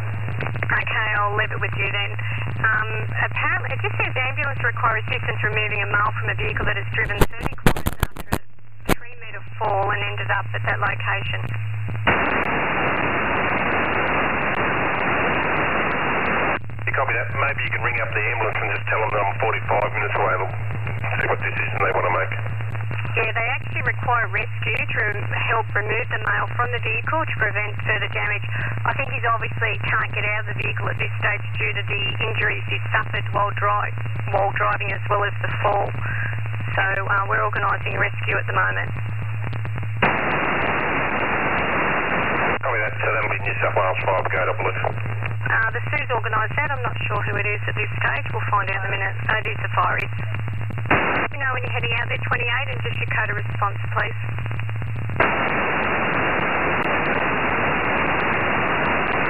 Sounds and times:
Radio: 0.0 - 59.3
Speech: 0.7 - 11.4, 16.9 - 22.4, 23.2 - 36.1, 36.8 - 38.9, 42.6 - 44.9, 45.5 - 50.1, 51.4 - 54.2.

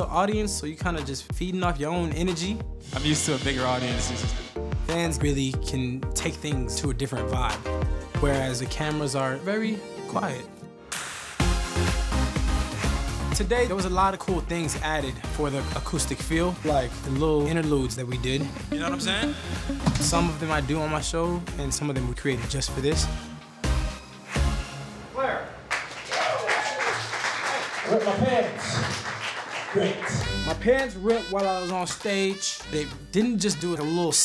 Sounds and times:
Speech: 0.0 - 7.6, 8.2 - 10.5, 13.4 - 19.4, 20.1 - 23.1, 27.8 - 28.9, 29.7 - 34.2
Musical instrument: 18.1 - 21.1, 30.1 - 34.2.

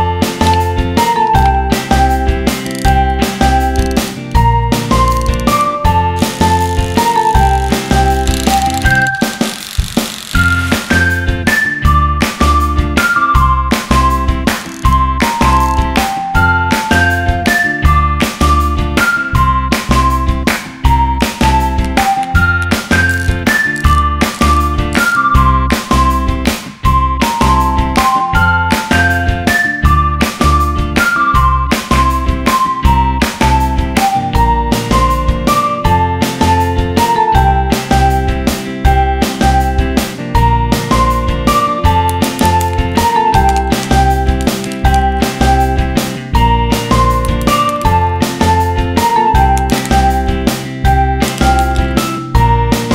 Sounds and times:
Music: 0.0 - 52.9.

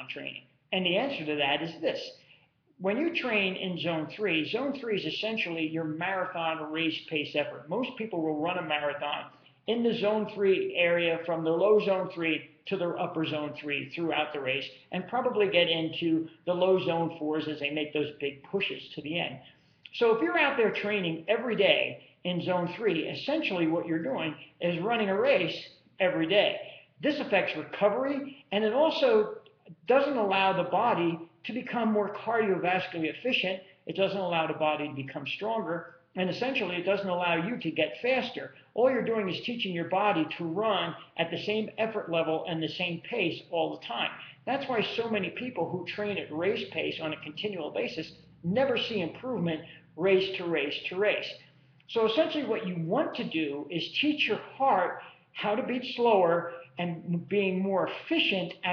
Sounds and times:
Male speech, man speaking: 0.0 - 2.2, 2.8 - 58.7.

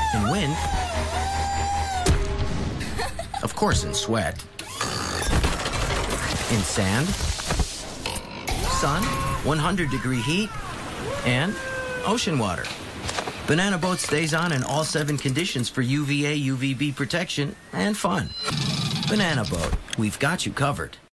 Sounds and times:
Speech: 13.5 - 18.3, 19.1 - 21.0.

